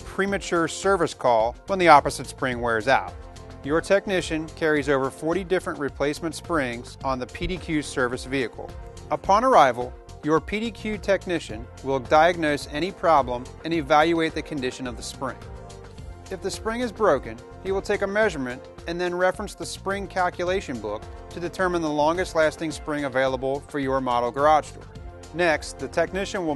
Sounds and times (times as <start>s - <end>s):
Speech: 0.0s - 3.1s, 3.7s - 15.4s, 16.3s - 24.8s, 25.4s - 26.5s
Music: 0.0s - 26.5s.